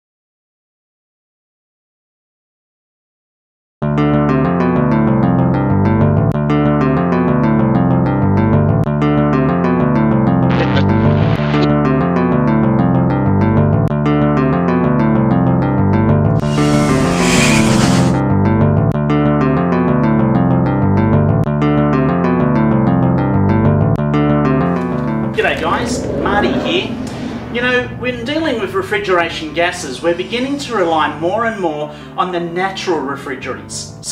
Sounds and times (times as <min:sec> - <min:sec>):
Synthesizer: 0:10.5 - 0:12.1.